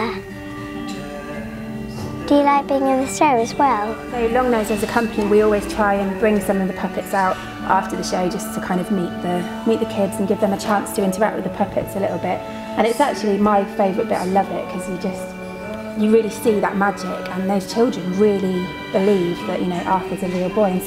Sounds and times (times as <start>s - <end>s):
Music: 0.0s - 20.8s.